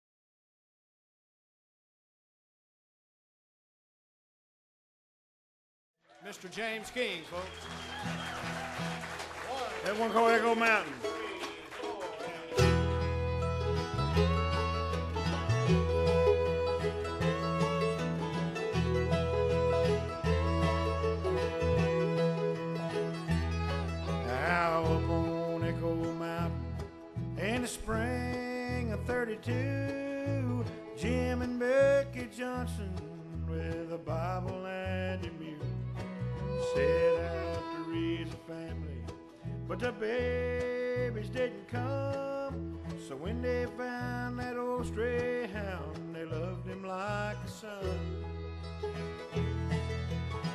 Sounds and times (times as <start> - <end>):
Music: 7.5 - 50.5.